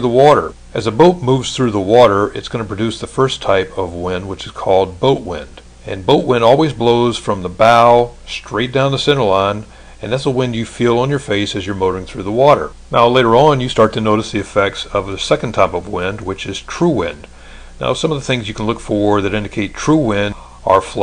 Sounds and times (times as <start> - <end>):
Speech: 0.0 - 21.0.